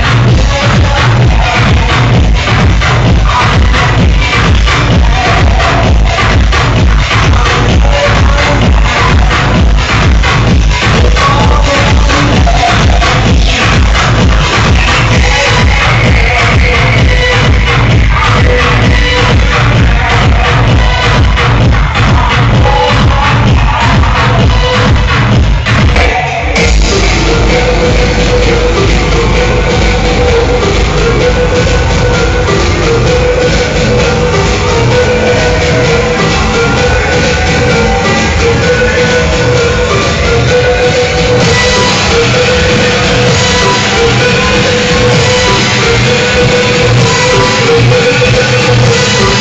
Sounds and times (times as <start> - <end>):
Electronica: 0.0 - 49.4.